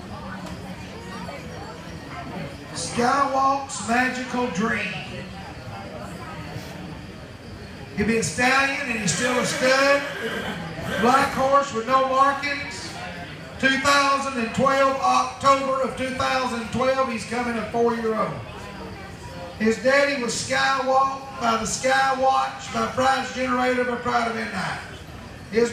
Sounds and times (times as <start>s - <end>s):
Speech: 0.0s - 7.0s, 7.8s - 10.2s, 10.8s - 25.7s.